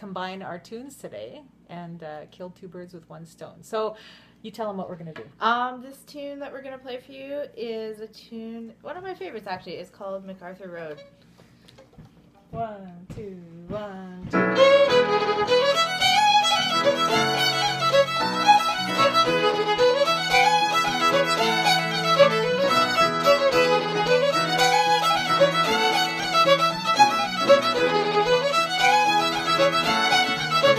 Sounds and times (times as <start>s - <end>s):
Violin, fiddle: 14.4s - 30.7s.